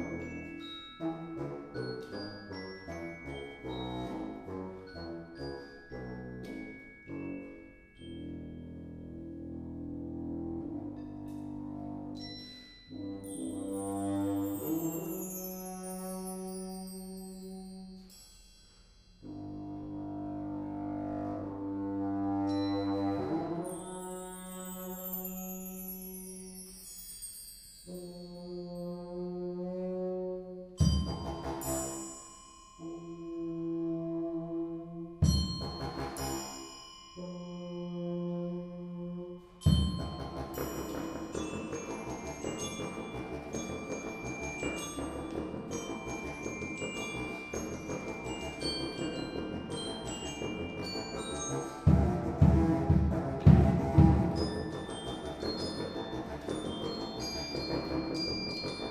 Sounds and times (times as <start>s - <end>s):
Percussion: 0.0s - 58.9s.